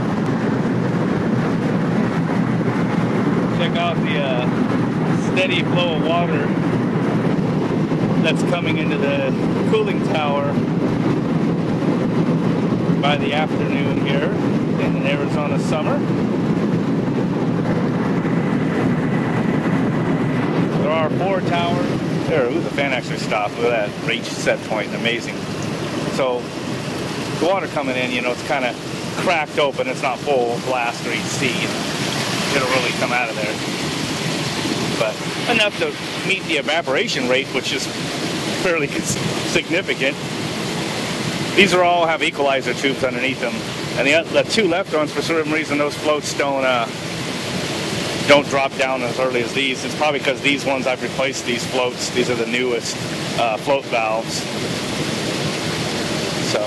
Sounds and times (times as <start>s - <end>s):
Speech: 3.5s - 6.6s, 8.2s - 10.6s, 13.0s - 16.1s, 20.8s - 25.4s, 26.1s - 26.5s, 27.4s - 31.8s, 32.5s - 33.6s, 35.0s - 37.9s, 38.6s - 40.2s, 41.6s - 47.0s, 48.3s - 54.5s, 56.4s - 56.6s
Fill (with liquid): 21.1s - 56.6s.